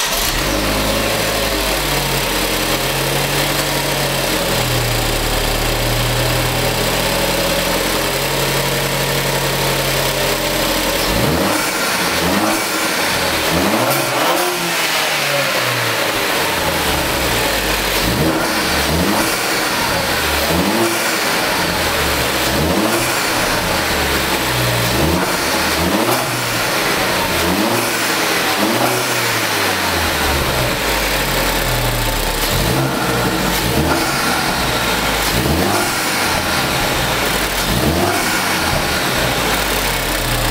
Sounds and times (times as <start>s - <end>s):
Medium engine (mid frequency): 0.0s - 40.5s
Vehicle: 0.0s - 40.5s
Accelerating, revving, vroom: 11.0s - 15.9s, 17.9s - 19.8s, 20.4s - 21.4s, 22.4s - 23.6s, 24.6s - 26.8s, 27.4s - 30.2s, 32.4s - 34.6s, 35.2s - 36.7s, 37.5s - 39.1s.